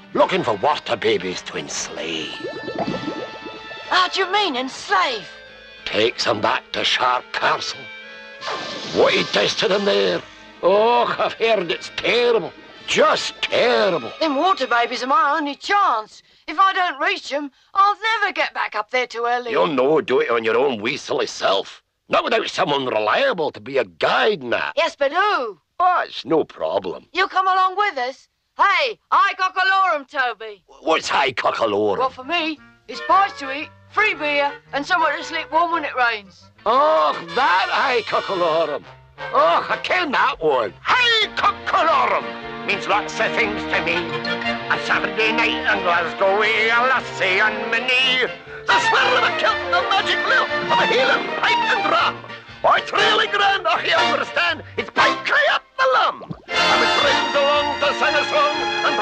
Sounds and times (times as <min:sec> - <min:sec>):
Music: 0:00.0 - 0:16.0, 0:30.9 - 0:59.0
Speech: 0:00.2 - 0:02.4, 0:05.9 - 0:07.9, 0:09.0 - 0:44.1, 0:44.7 - 0:59.0.